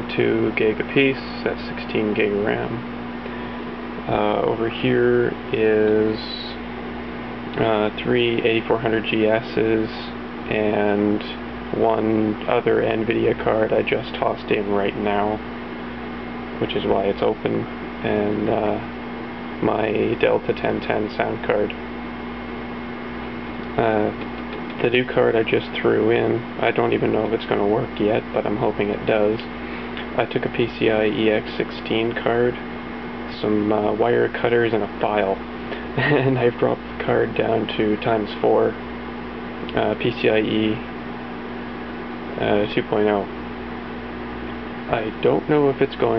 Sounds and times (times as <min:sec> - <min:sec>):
Speech: 0:00.0 - 0:02.9, 0:04.0 - 0:06.6, 0:07.5 - 0:15.4, 0:16.6 - 0:18.9, 0:19.6 - 0:21.8, 0:23.8 - 0:32.6, 0:33.3 - 0:38.8, 0:39.7 - 0:40.9, 0:42.4 - 0:43.4, 0:44.9 - 0:46.1.